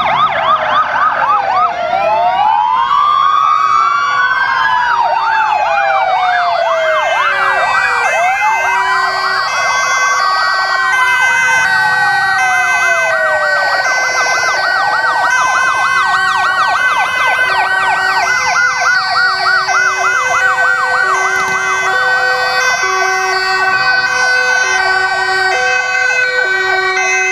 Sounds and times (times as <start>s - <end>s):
Fire engine, fire truck (siren): 0.0s - 27.3s.